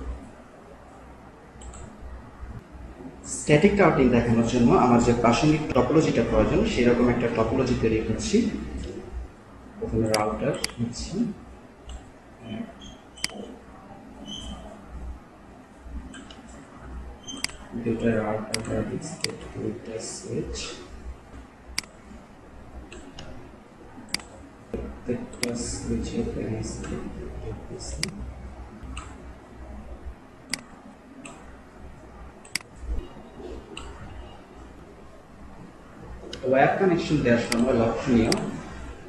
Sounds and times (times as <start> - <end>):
Speech: 3.2 - 9.1, 9.8 - 11.4, 17.7 - 20.9, 24.8 - 28.3, 36.3 - 39.0.